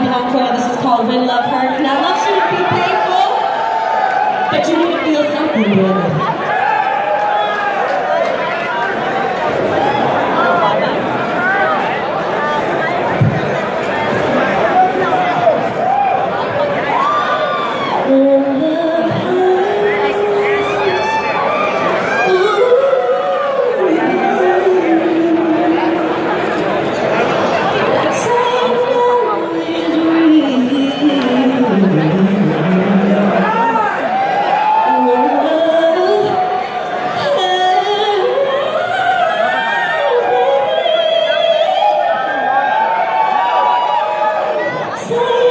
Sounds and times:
Female singing: 18.1s - 20.9s, 22.2s - 26.1s, 28.0s - 33.5s, 34.8s - 42.0s, 45.0s - 45.5s.

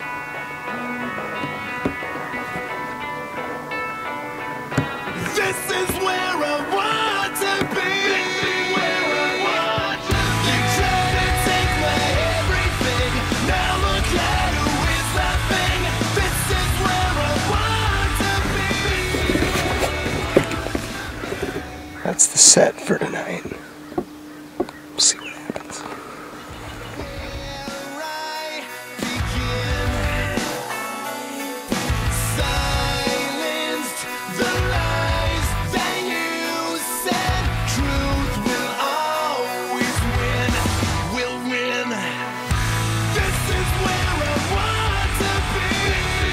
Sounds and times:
Rhythm and blues: 0.0s - 22.2s, 26.6s - 46.3s
Speech: 22.0s - 23.6s, 25.0s - 25.9s.

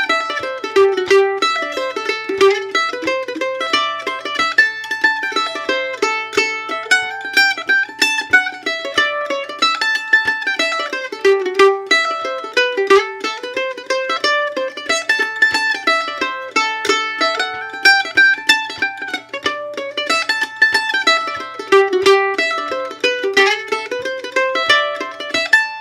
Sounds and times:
Pizzicato: 0.0s - 25.8s.

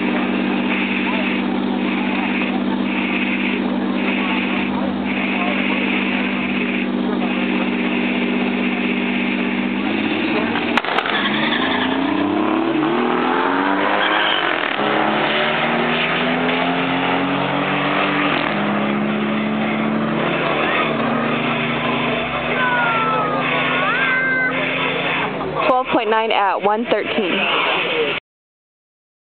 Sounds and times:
Speech: 25.6s - 28.2s.

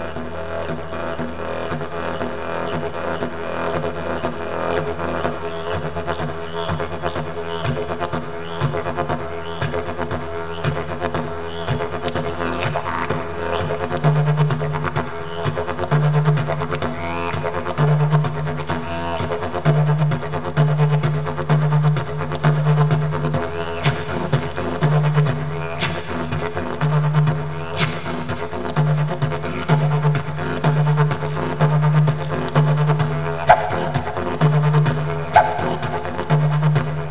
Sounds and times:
Wind instrument, woodwind instrument: 0.0s - 37.1s.

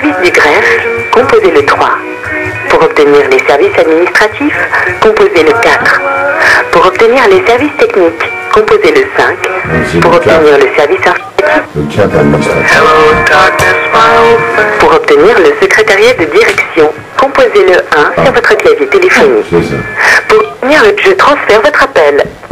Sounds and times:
Music: 0.0s - 21.1s
Speech: 15.1s - 19.8s.

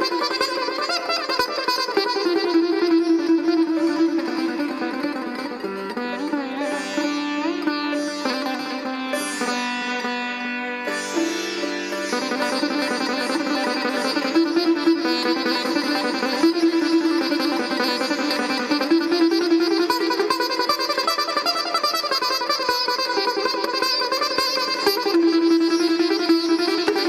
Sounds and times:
Sitar: 0.0s - 27.0s.

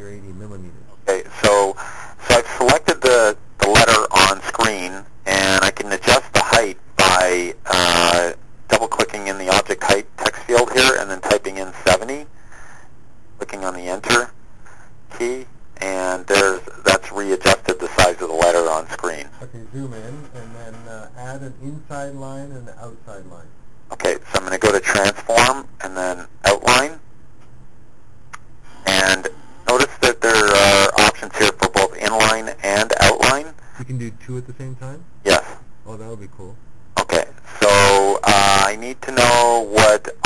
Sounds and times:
Speech: 0.0s - 12.3s, 13.4s - 14.4s, 15.1s - 27.0s, 28.9s - 40.2s.

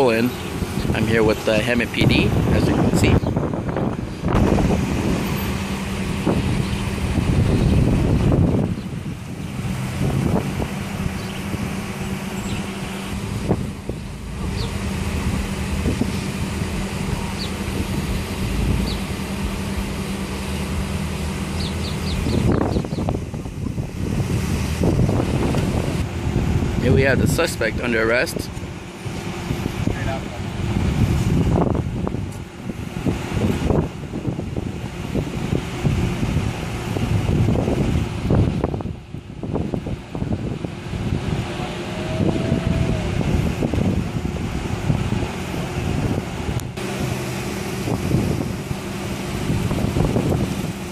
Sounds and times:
Vehicle: 0.0s - 50.9s.

